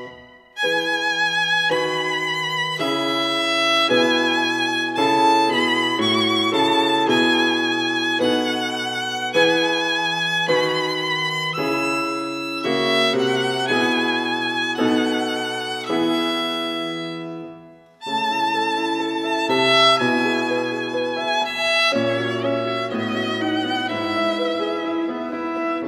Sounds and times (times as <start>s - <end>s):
Violin, fiddle: 0.0s - 25.8s.